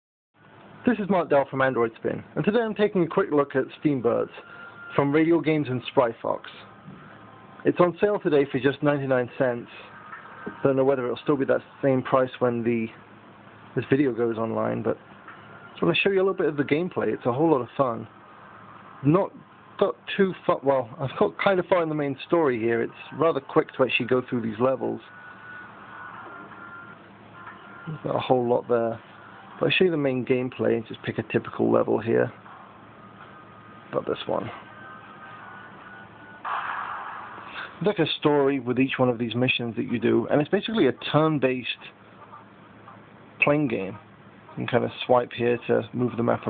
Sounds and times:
Speech: 0:00.8 - 0:06.7, 0:07.6 - 0:09.9, 0:10.5 - 0:13.0, 0:13.8 - 0:15.0, 0:15.8 - 0:18.1, 0:19.0 - 0:25.1, 0:27.9 - 0:29.0, 0:29.6 - 0:32.4, 0:33.9 - 0:34.6, 0:37.8 - 0:46.5.

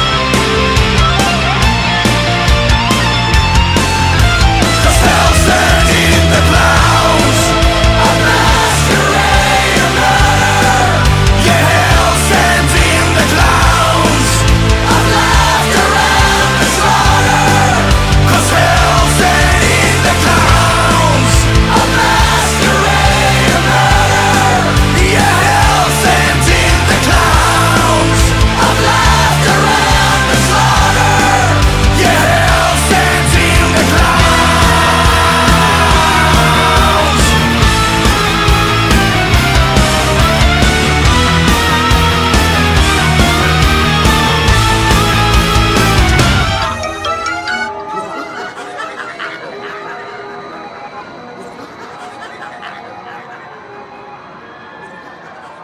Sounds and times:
Laughter: 0:47.8 - 0:50.5, 0:51.4 - 0:53.6.

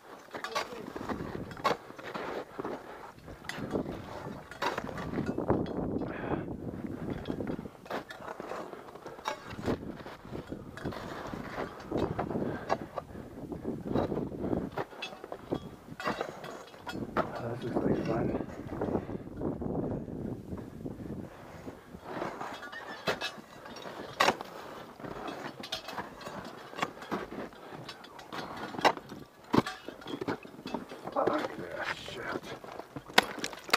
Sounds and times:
Speech: 0:17.3 - 0:18.5, 0:31.2 - 0:32.6.

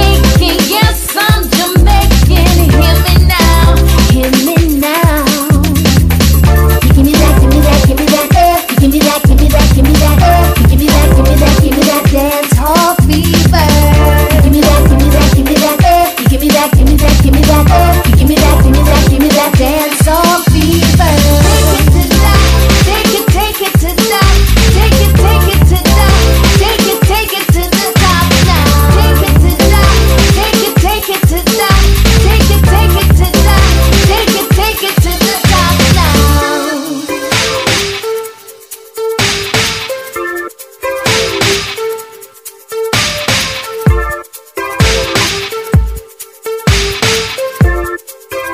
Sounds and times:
House music: 0:00.0 - 0:48.5.

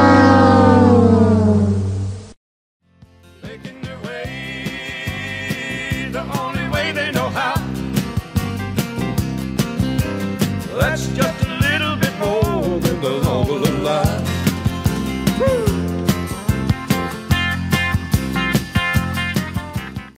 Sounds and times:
Music: 0:02.8 - 0:20.1.

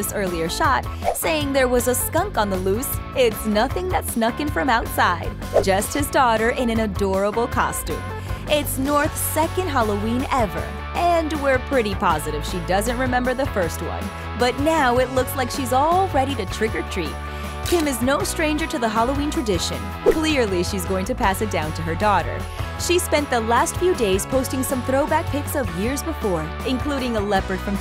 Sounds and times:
Music: 0:00.0 - 0:27.8
Speech: 0:00.0 - 0:27.8.

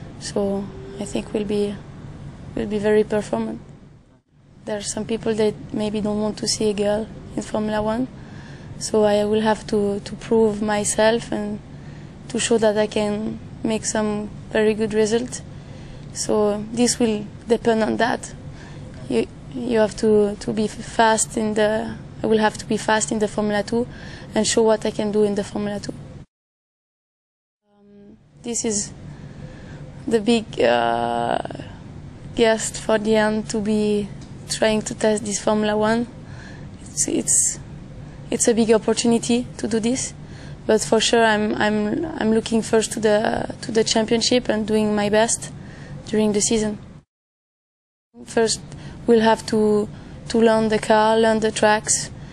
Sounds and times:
Speech: 0:00.2 - 0:01.8, 0:02.6 - 0:03.6, 0:04.7 - 0:08.1, 0:08.8 - 0:11.6, 0:12.3 - 0:15.4, 0:16.1 - 0:26.0, 0:27.7 - 0:29.0, 0:30.0 - 0:31.8, 0:32.4 - 0:36.2, 0:36.8 - 0:37.7, 0:38.3 - 0:46.8, 0:48.2 - 0:52.1.

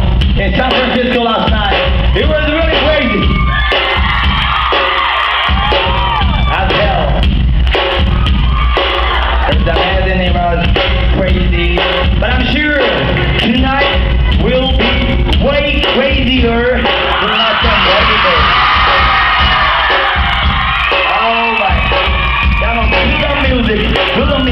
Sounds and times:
Rhythm and blues: 0:00.0 - 0:24.5
Speech: 0:00.4 - 0:03.2, 0:06.5 - 0:07.2, 0:09.5 - 0:18.4.

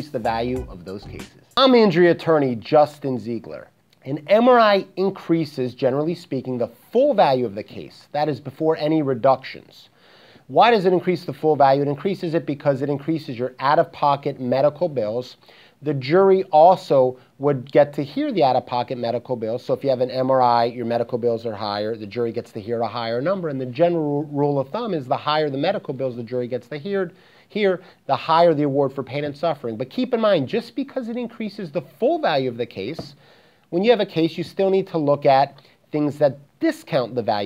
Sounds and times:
Speech: 0:00.0 - 0:09.9, 0:10.5 - 0:37.4.

